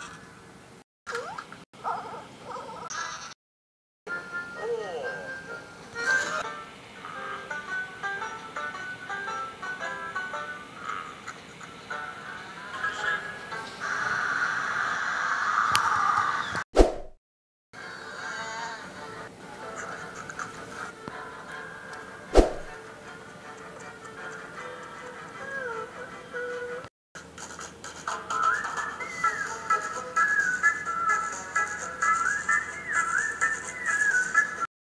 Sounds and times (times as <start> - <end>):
Music: 4.1 - 14.7, 17.8 - 34.7.